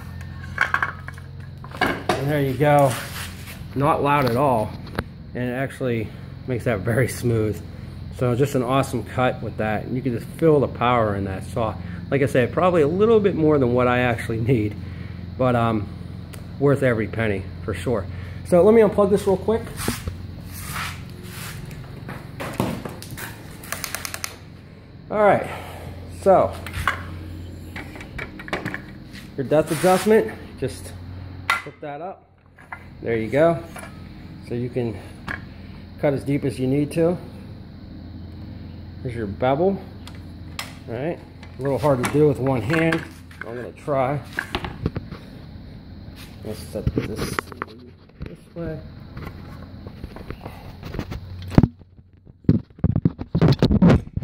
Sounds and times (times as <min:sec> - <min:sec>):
Speech: 0:02.2 - 0:03.0, 0:03.8 - 0:04.8, 0:05.4 - 0:07.6, 0:08.2 - 0:14.8, 0:15.4 - 0:15.9, 0:16.6 - 0:19.8, 0:29.4 - 0:31.0, 0:31.7 - 0:32.2, 0:33.0 - 0:33.7, 0:34.4 - 0:35.0, 0:36.0 - 0:37.3, 0:39.0 - 0:39.9, 0:40.9 - 0:44.3, 0:46.4 - 0:48.9.